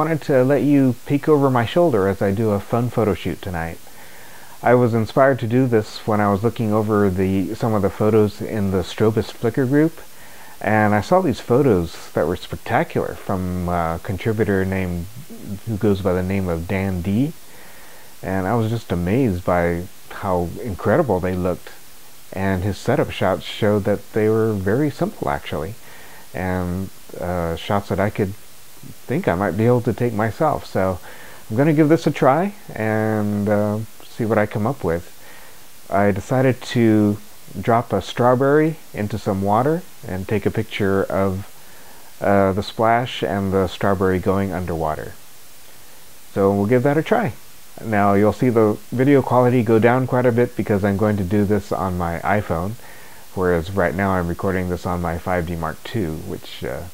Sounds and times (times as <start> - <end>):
Speech: 0.0 - 3.8, 4.6 - 17.4, 18.2 - 35.1, 35.9 - 41.6, 42.2 - 45.2, 46.3 - 56.9.